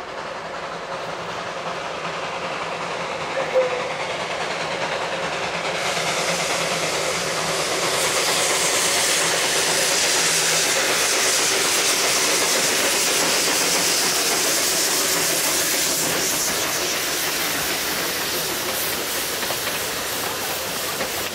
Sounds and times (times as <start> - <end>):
Railroad car, train wagon: 0.0 - 21.3
Train: 0.0 - 21.3.